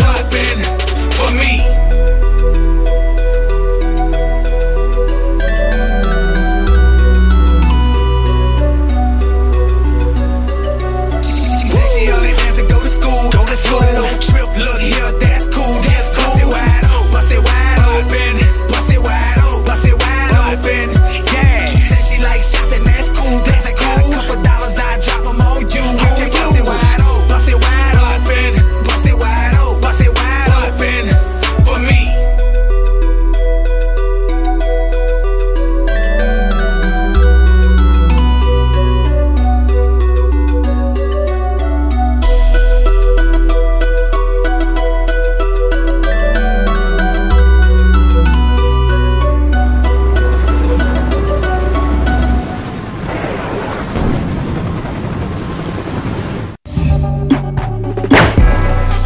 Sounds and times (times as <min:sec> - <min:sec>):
Music: 0:00.0 - 0:52.7, 0:56.7 - 0:59.0.